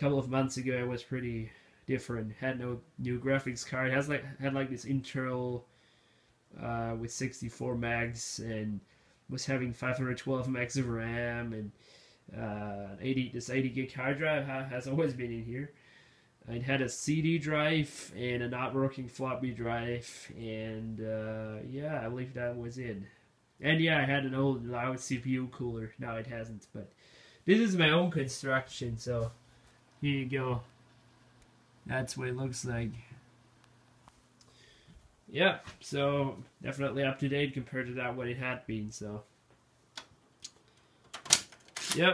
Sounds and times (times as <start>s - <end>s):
Speech: 0.0s - 5.7s, 6.5s - 15.8s, 16.4s - 26.9s, 27.5s - 29.4s, 30.0s - 30.7s, 31.8s - 33.2s, 35.3s - 39.3s, 41.9s - 42.1s.